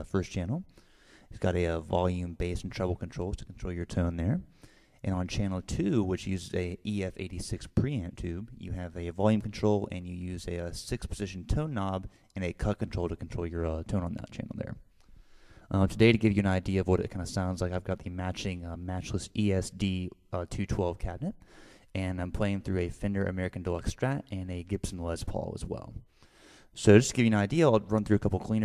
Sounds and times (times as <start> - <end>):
Speech: 0.0 - 0.7, 1.3 - 14.9, 15.7 - 26.0, 26.8 - 28.6.